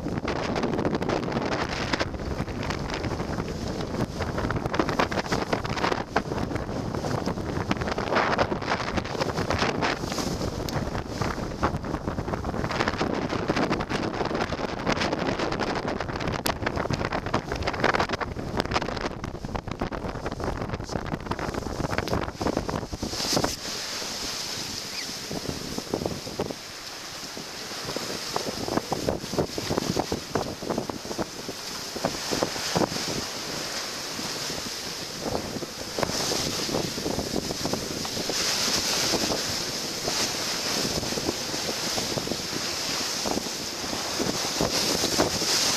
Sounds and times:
Wind noise (microphone): 0.0 - 45.7.

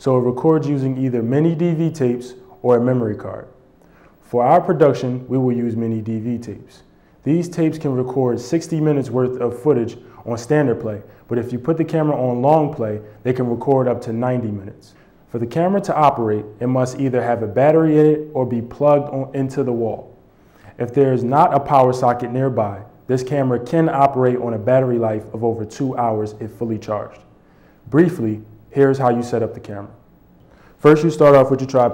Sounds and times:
Speech: 0.0 - 3.6, 4.2 - 20.1, 20.7 - 30.0, 30.8 - 31.9.

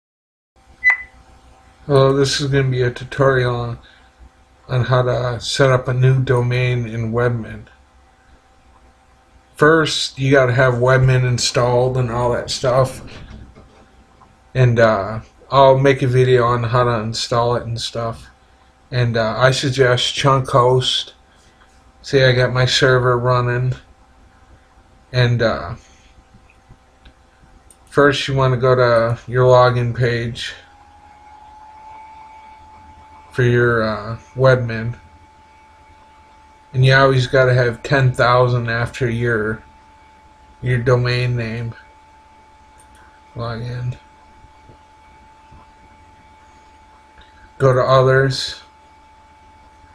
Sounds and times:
Inside, small room: 0.6 - 49.9
Beep, bleep: 0.8 - 1.1
Speech: 1.8 - 3.9, 4.7 - 7.7, 9.6 - 13.4, 14.6 - 18.3, 18.9 - 21.1, 22.0 - 23.8, 25.1 - 25.8, 27.9 - 30.7, 33.3 - 35.0, 36.8 - 39.6, 40.6 - 41.8, 43.4 - 44.1, 47.6 - 48.7.

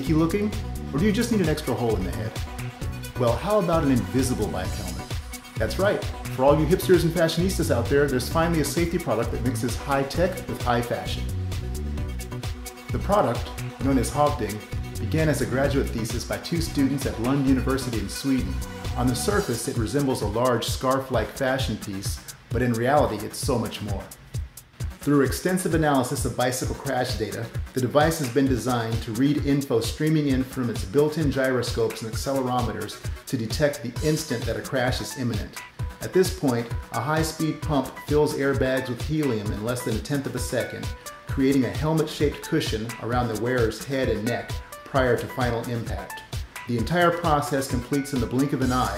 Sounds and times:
Speech: 0.0 - 2.4, 3.2 - 11.3, 12.9 - 24.2, 25.0 - 48.9
Music: 0.0 - 48.9.

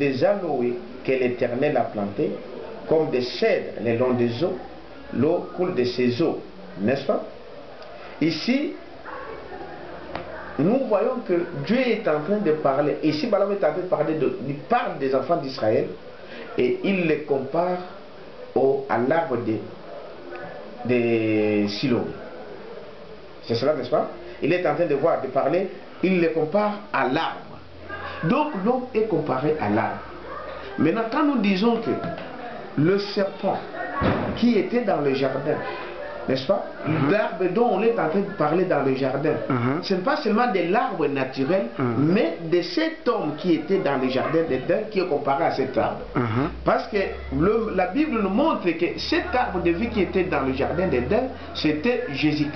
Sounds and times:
Speech: 0.0 - 7.3, 8.2 - 22.3, 23.4 - 52.5
Inside, small room: 0.0 - 52.5.

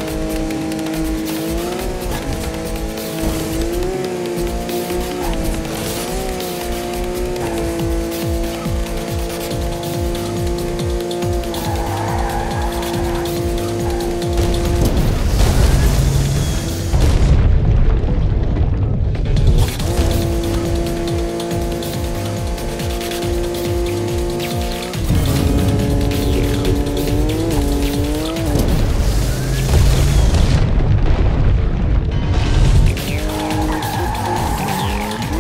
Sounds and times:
Car: 0.0 - 35.4
Music: 0.0 - 35.4.

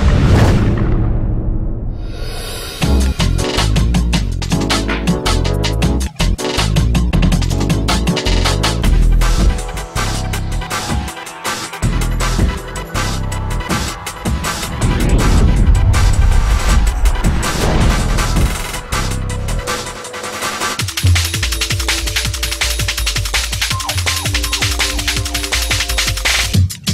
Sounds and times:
Music: 2.7 - 26.9.

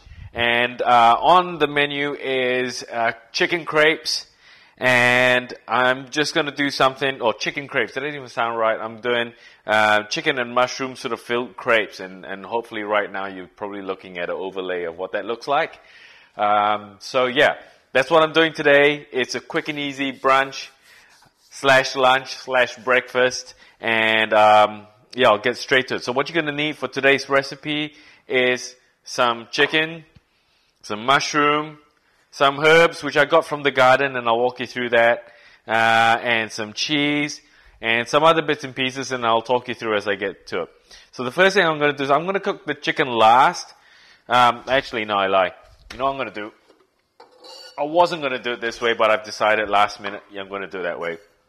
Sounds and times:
Speech: 0.0 - 15.8, 16.4 - 20.8, 21.5 - 30.1, 30.8 - 31.8, 32.4 - 46.6, 47.5 - 51.3.

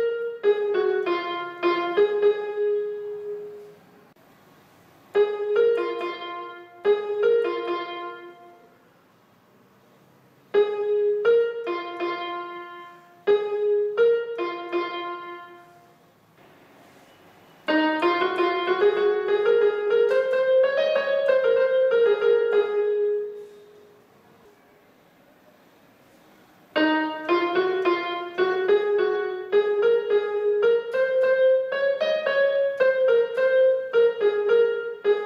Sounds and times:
Piano: 0.0 - 35.2.

